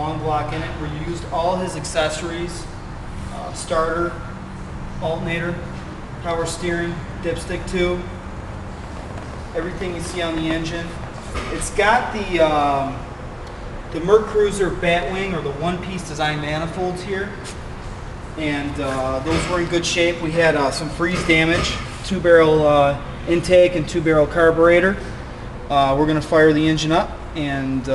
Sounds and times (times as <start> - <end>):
Speech: 0.0 - 4.3, 5.0 - 8.2, 9.6 - 13.1, 13.9 - 17.4, 18.4 - 25.0, 25.7 - 27.9.